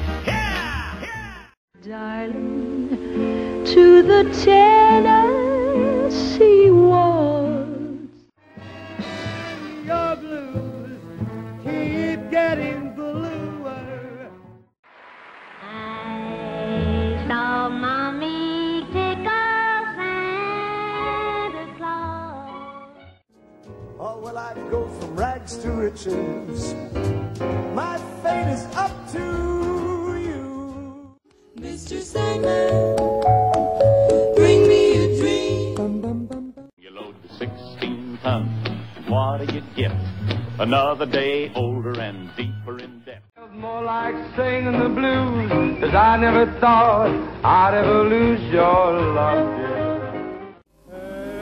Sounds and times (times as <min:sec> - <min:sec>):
Tender music: 0:22.2 - 0:36.7.